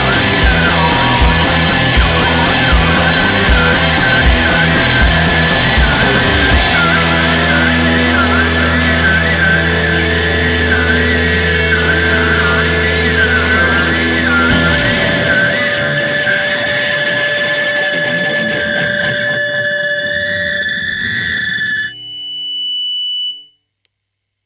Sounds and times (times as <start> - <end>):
Music: 0.0 - 23.6.